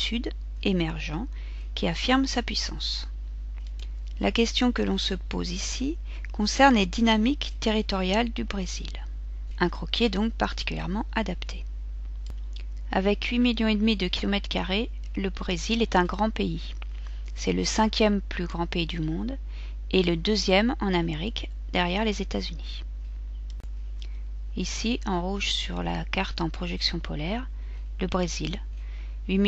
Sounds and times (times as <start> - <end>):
Speech: 0.0 - 3.1, 4.2 - 11.6, 12.9 - 16.8, 17.4 - 22.8, 24.6 - 28.7.